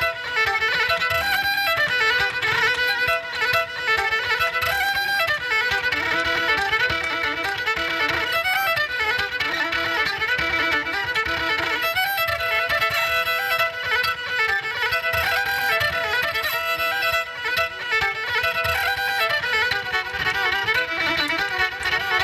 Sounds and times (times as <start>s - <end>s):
Violin, fiddle: 0.0s - 22.2s.